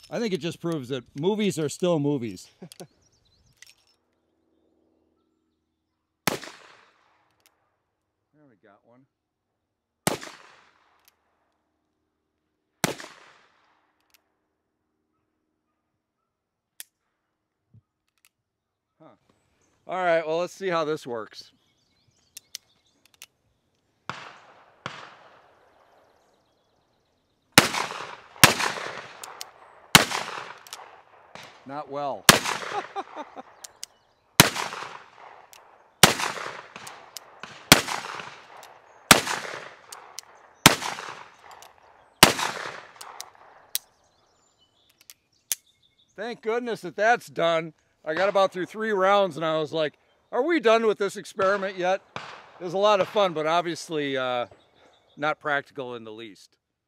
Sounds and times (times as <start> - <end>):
Outside, rural or natural: 0.0 - 56.8.